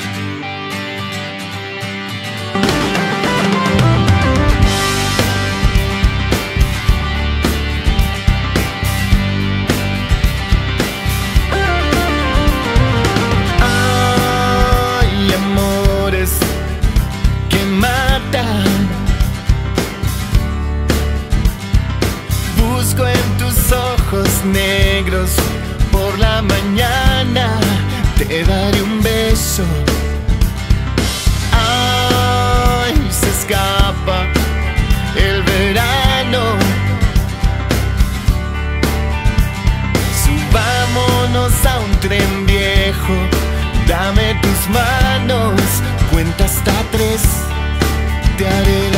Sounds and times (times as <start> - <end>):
Music: 0.0 - 48.9.